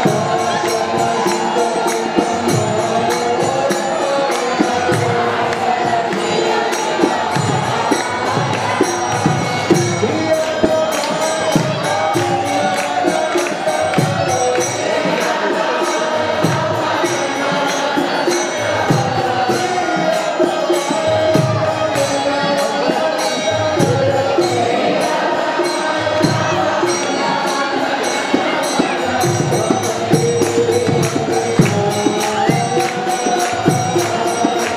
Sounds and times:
Music: 0.0 - 34.7.

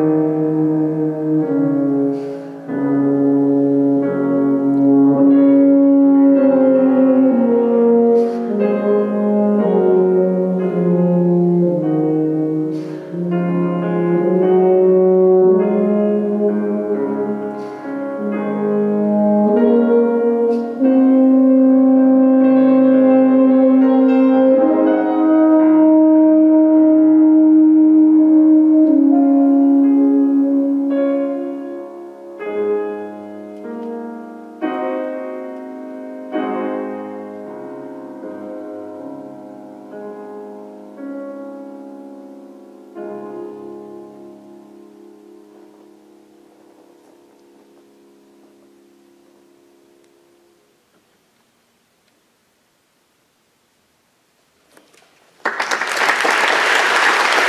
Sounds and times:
Musical instrument: 0.0 - 50.6.

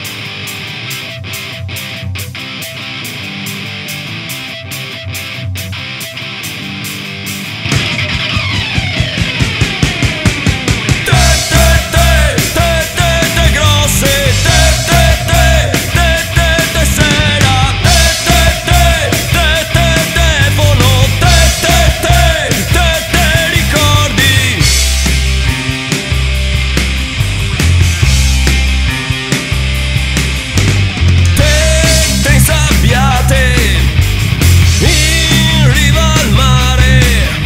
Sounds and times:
Music: 0.0 - 37.4.

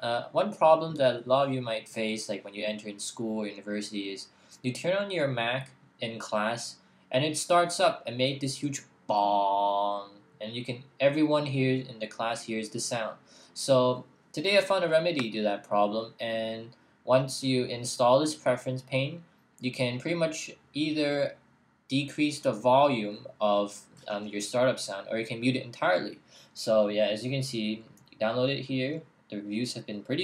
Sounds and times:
Speech: 0.0 - 30.2.

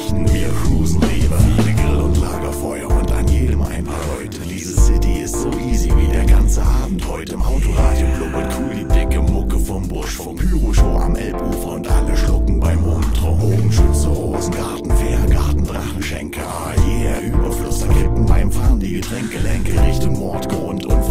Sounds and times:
Music: 0.0 - 21.1.

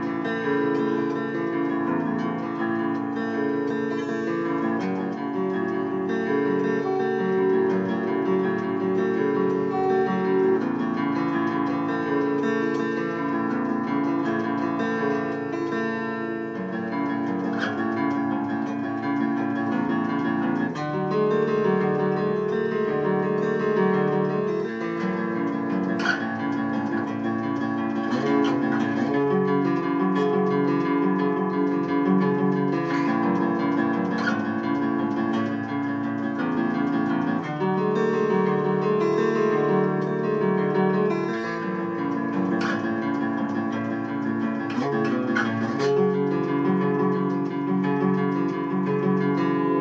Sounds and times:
Acoustic guitar: 0.0 - 49.8.

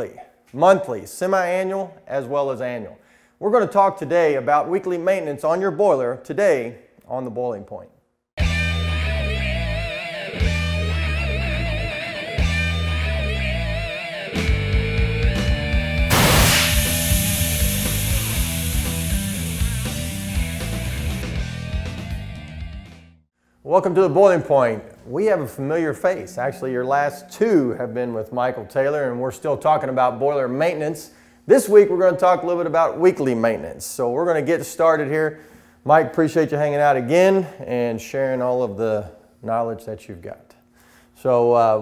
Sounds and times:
Speech: 0.0 - 8.0, 23.7 - 40.6, 41.2 - 41.8.

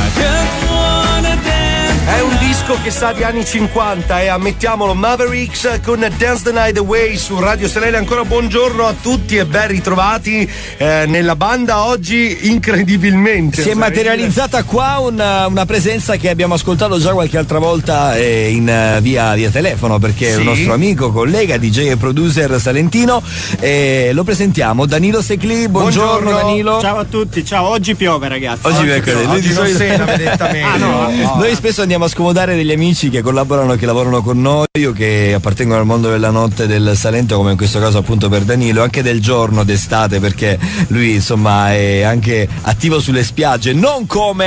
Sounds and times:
Music: 0.0 - 44.4
Speech: 1.9 - 44.4
Radio: 12.6 - 14.8, 19.7 - 21.0, 25.4 - 27.1, 28.6 - 31.6.

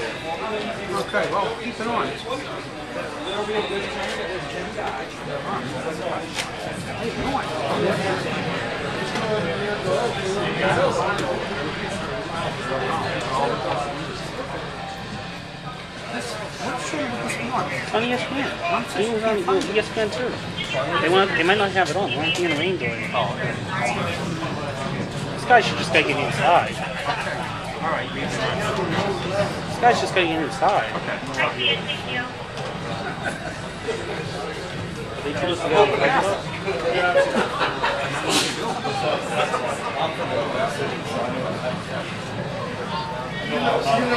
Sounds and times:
Speech: 0.0 - 32.4, 33.3 - 44.1.

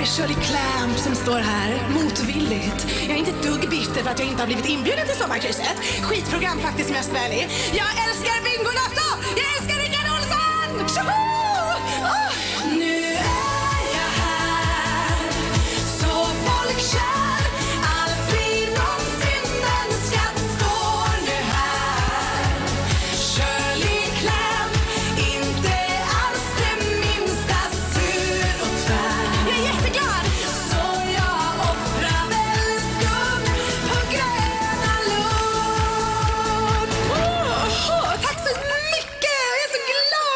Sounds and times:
Music: 0.0 - 40.3.

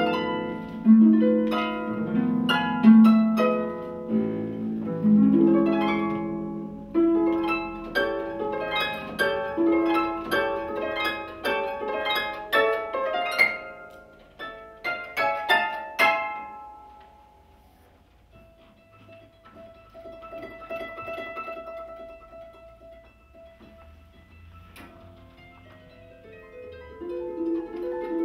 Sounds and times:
Harp: 0.0 - 28.2
Pizzicato: 0.0 - 28.2.

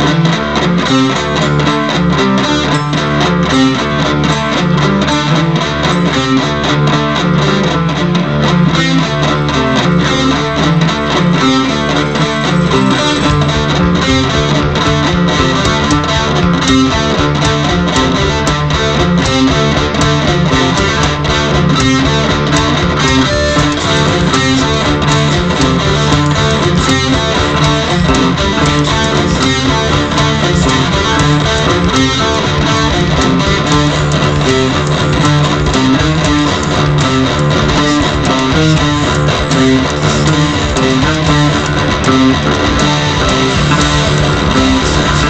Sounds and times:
Bass guitar: 0.0 - 45.2
Electric guitar: 0.0 - 45.2.

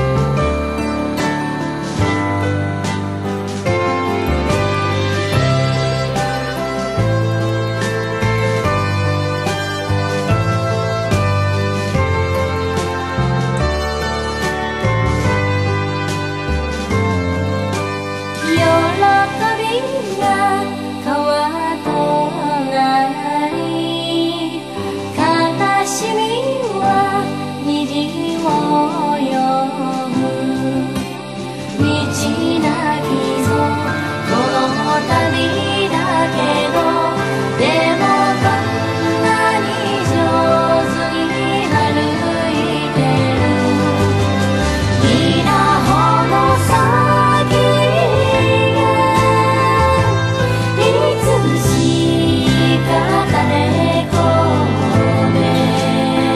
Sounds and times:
Jingle (music): 0.0 - 56.3.

